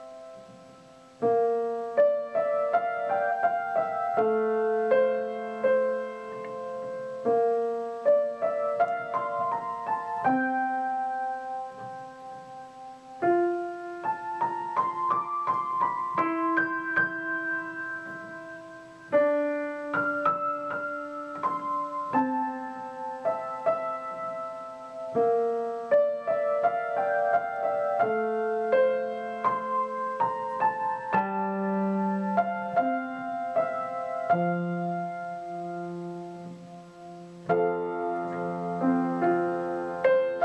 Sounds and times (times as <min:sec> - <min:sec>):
Music: 0:00.0 - 0:40.4.